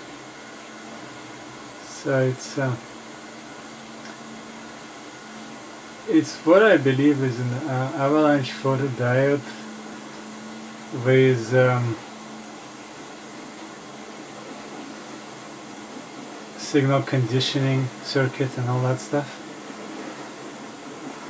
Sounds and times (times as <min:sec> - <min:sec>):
Speech: 0:01.8 - 0:02.8, 0:06.1 - 0:09.7, 0:11.0 - 0:12.0, 0:16.6 - 0:19.4.